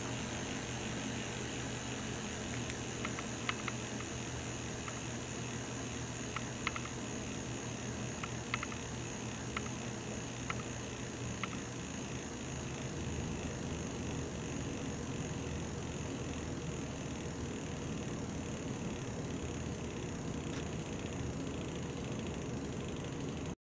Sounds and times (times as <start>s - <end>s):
Bicycle: 15.8s - 23.6s.